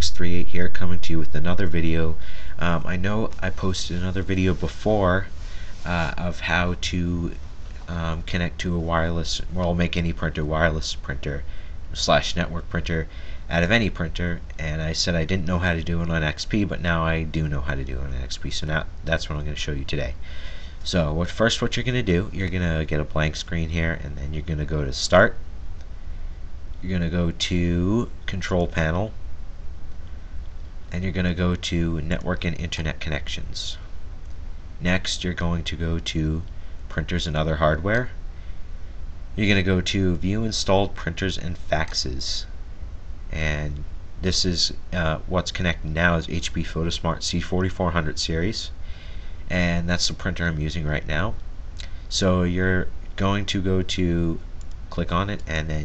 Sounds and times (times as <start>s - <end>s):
Speech: 0.0s - 20.2s, 20.8s - 25.4s, 26.8s - 29.2s, 30.9s - 33.9s, 34.8s - 38.2s, 39.4s - 42.5s, 43.3s - 48.8s, 49.5s - 51.4s, 52.1s - 55.8s.